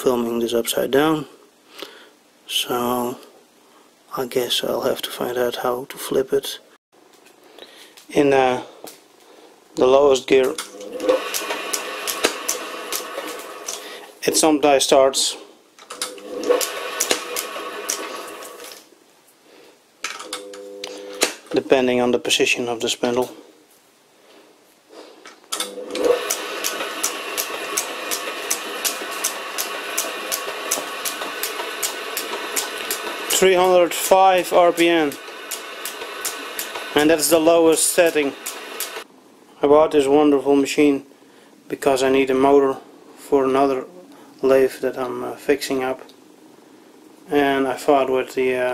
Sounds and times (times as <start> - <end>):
Speech: 0.0 - 1.4, 2.5 - 3.3, 4.1 - 6.7, 8.1 - 8.7, 9.8 - 10.6, 14.2 - 15.5, 21.5 - 23.4, 33.3 - 35.2, 37.0 - 38.4, 39.6 - 41.1, 41.7 - 46.1, 47.3 - 48.7.